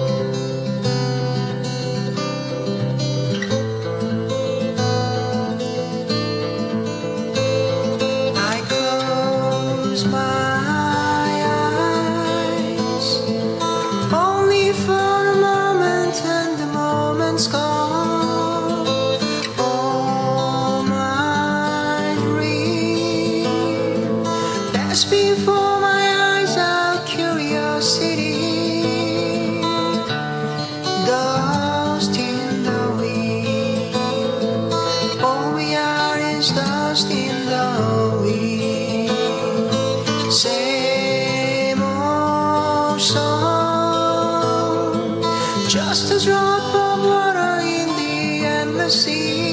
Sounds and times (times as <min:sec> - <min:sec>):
Music: 0:00.0 - 0:49.5.